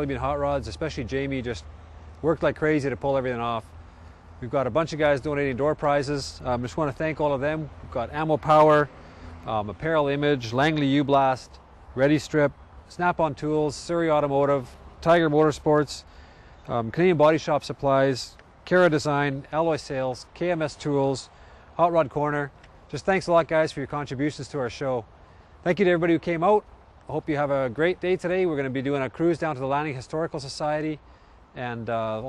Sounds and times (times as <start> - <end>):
Speech: 0.0 - 3.7, 4.4 - 8.9, 9.5 - 16.1, 16.7 - 31.0, 31.6 - 32.2.